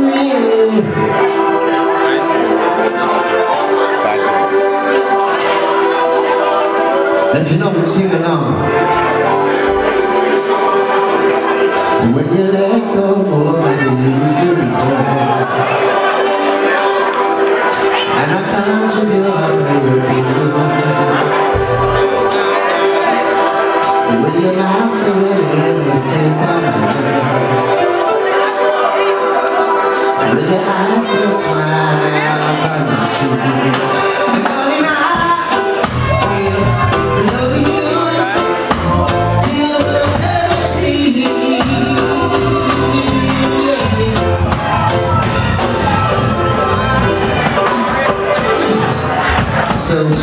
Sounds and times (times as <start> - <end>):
Male singing: 0.0 - 1.1, 12.0 - 15.8, 18.0 - 21.8, 24.1 - 27.7, 30.2 - 44.9, 49.7 - 50.2
Music: 0.0 - 50.2.